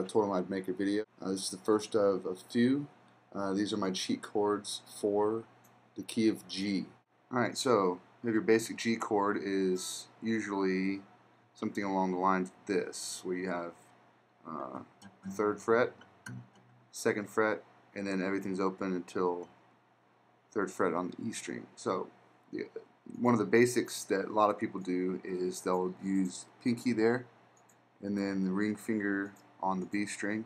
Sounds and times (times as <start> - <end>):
Speech: 0.0 - 13.8, 14.5 - 16.4, 17.0 - 19.5, 20.6 - 27.4, 28.0 - 30.4.